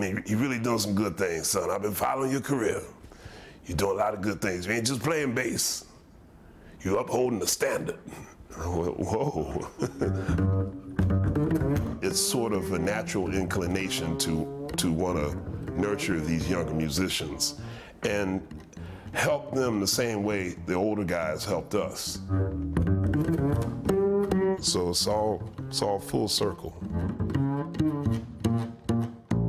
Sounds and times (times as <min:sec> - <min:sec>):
Double bass: 0:08.5 - 0:29.4
Pizzicato: 0:08.7 - 0:19.2
Cello: 0:09.6 - 0:19.7, 0:22.1 - 0:26.1, 0:26.7 - 0:29.4.